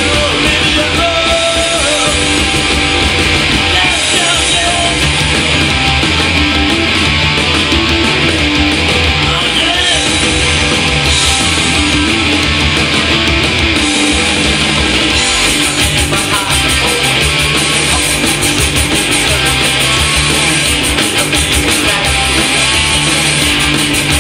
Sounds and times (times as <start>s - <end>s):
Music: 0.0s - 24.2s.